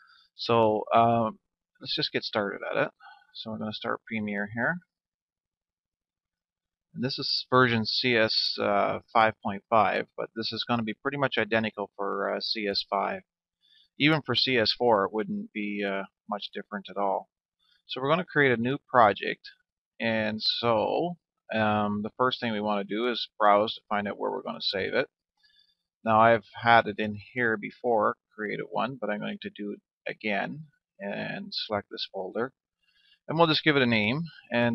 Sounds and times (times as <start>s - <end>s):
Speech: 0.4s - 4.8s, 7.0s - 13.2s, 14.0s - 17.2s, 17.9s - 25.1s, 26.1s - 32.5s, 33.3s - 34.7s.